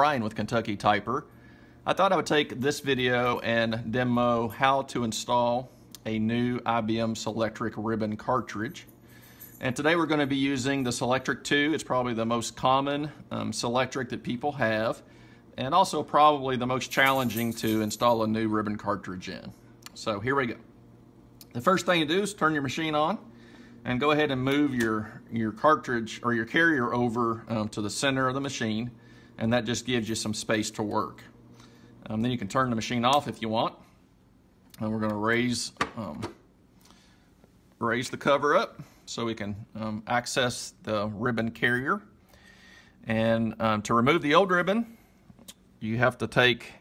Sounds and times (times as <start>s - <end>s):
Speech: 0.0s - 8.9s, 9.6s - 15.0s, 15.6s - 20.7s, 21.4s - 31.3s, 32.0s - 33.8s, 34.8s - 36.4s, 37.8s - 42.1s, 43.0s - 45.0s, 45.8s - 46.8s.